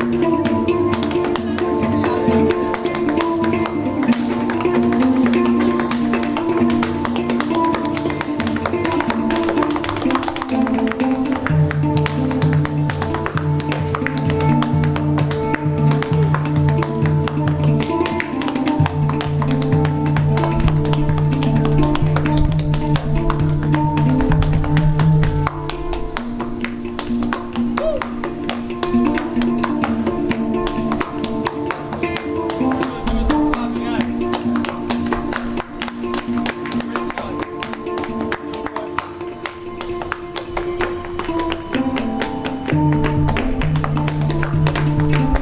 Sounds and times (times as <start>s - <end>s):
Music: 0.0s - 45.4s.